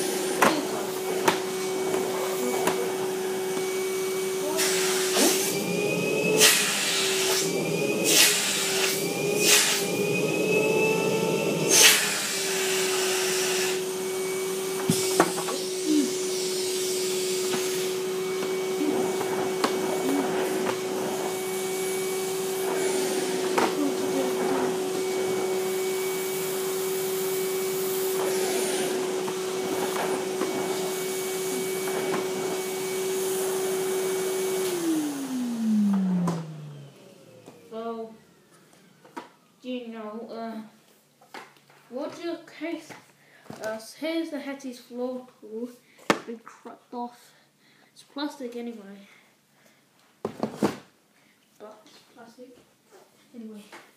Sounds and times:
Vacuum cleaner: 0.0s - 40.4s.

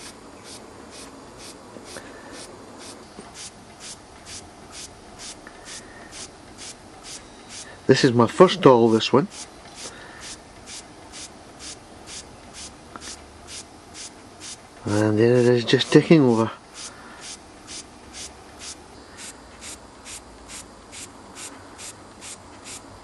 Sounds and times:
Hiss: 0.0s - 7.8s, 9.3s - 14.6s, 16.7s - 23.0s.

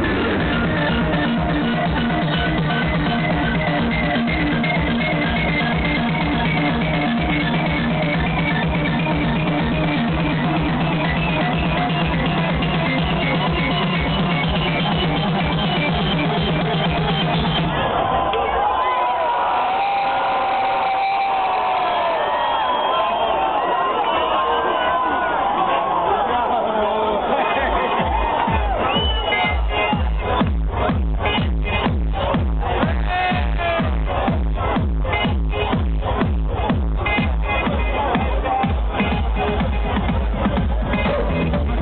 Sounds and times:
Electronic music: 0.0s - 23.9s, 27.2s - 41.8s.

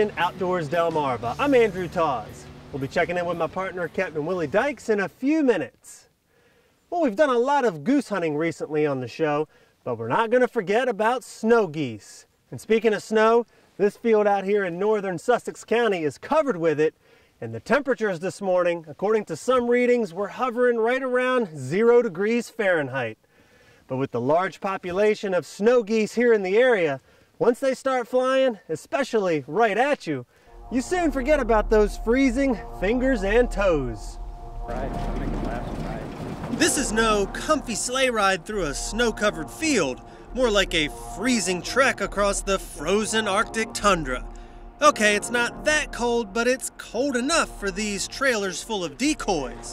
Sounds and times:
Speech: 0.0s - 6.1s, 6.9s - 23.2s, 23.9s - 49.7s.

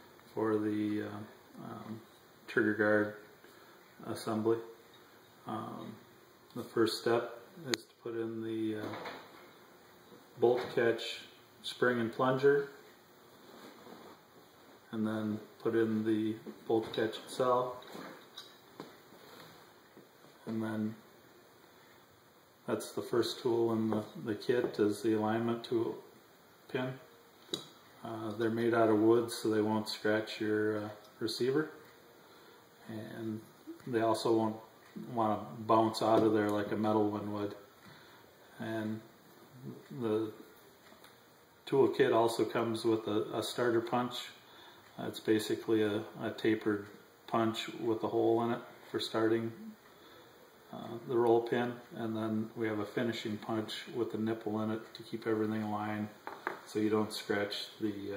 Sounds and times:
Speech: 0.3s - 3.3s, 4.0s - 4.8s, 5.4s - 9.2s, 10.4s - 12.8s, 14.9s - 18.0s, 20.4s - 21.0s, 22.7s - 26.1s, 26.7s - 27.1s, 28.0s - 31.8s, 32.8s - 37.7s, 38.5s - 40.5s, 41.6s - 49.8s, 50.7s - 58.1s.

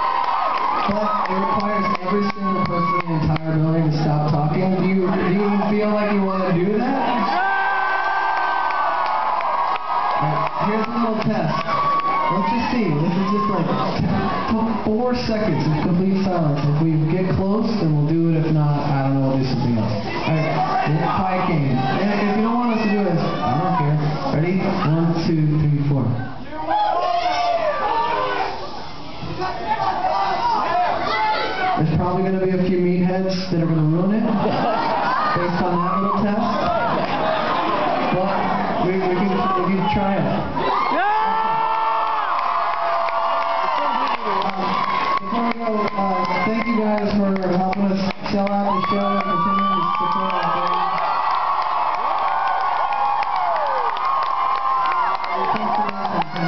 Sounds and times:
Speech: 0.9s - 7.3s, 10.2s - 11.7s, 12.3s - 13.8s, 14.5s - 26.8s, 31.8s - 34.4s, 35.4s - 36.7s, 38.1s - 40.4s, 43.9s - 50.8s, 55.4s - 56.4s.

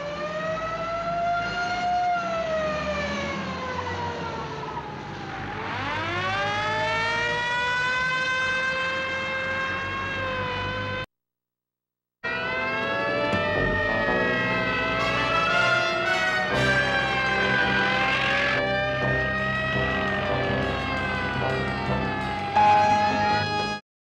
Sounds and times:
Fire engine, fire truck (siren): 0.0s - 11.1s, 12.2s - 23.8s
Music: 12.6s - 23.8s.

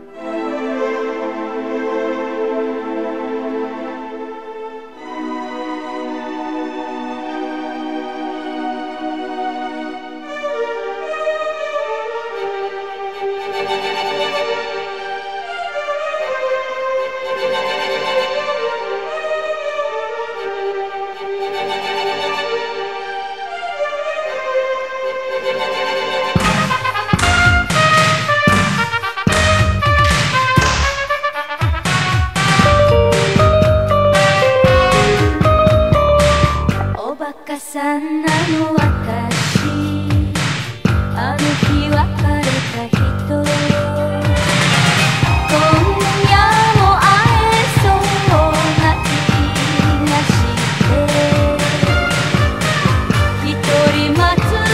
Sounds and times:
New-age music: 0.0s - 37.4s, 43.8s - 54.7s.

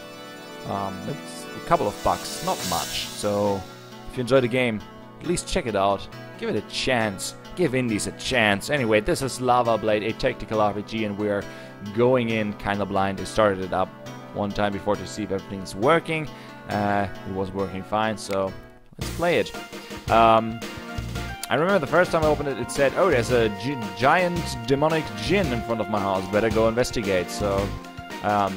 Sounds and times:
Music: 0.0s - 28.5s
Speech: 0.7s - 20.6s, 21.5s - 28.5s.

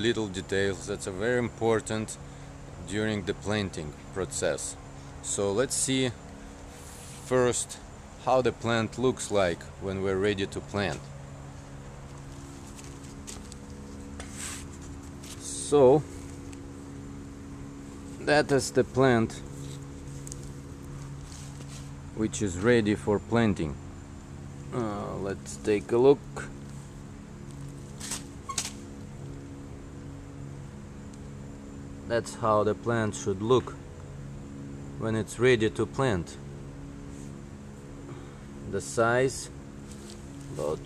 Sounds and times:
Speech: 0.0s - 2.2s, 2.8s - 6.2s, 7.2s - 11.1s, 15.4s - 16.1s, 18.2s - 19.4s, 22.2s - 23.8s, 24.7s - 26.6s, 32.1s - 33.8s, 35.0s - 36.4s, 38.7s - 39.5s, 40.5s - 40.8s.

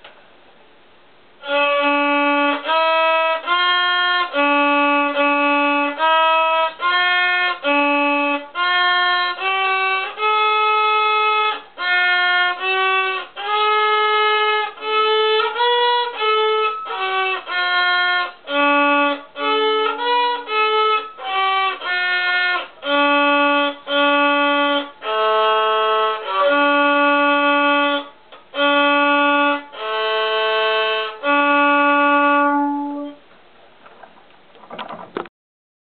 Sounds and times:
Violin, fiddle: 1.4s - 33.2s.

